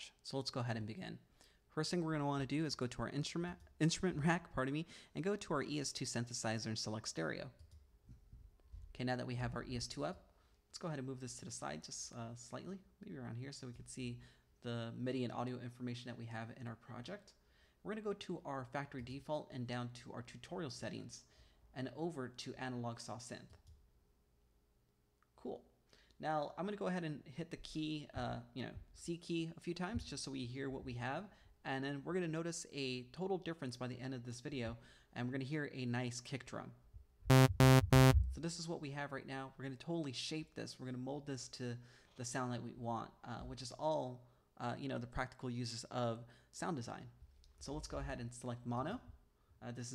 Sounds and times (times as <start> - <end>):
Speech: 0.0 - 7.6, 8.9 - 23.6, 25.4 - 36.8, 38.4 - 49.9.